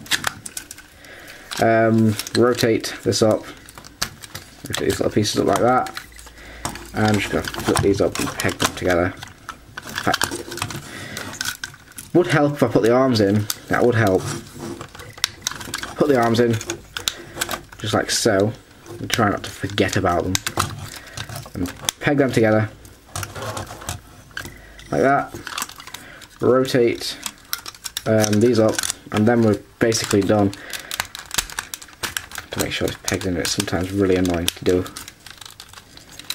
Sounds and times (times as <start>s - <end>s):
Speech: 1.6s - 3.6s, 4.7s - 6.0s, 7.0s - 9.2s, 12.1s - 14.3s, 16.0s - 16.7s, 17.8s - 20.4s, 21.6s - 22.8s, 24.9s - 25.4s, 26.4s - 27.3s, 28.0s - 30.6s, 32.5s - 35.0s.